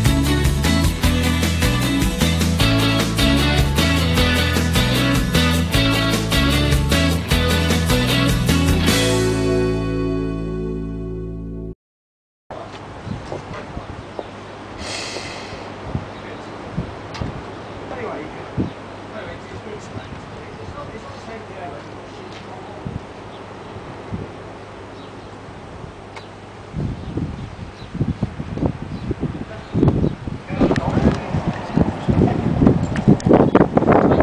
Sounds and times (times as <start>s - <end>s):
Speech: 17.9s - 18.5s, 19.1s - 23.0s, 29.4s - 29.8s, 30.5s - 32.6s.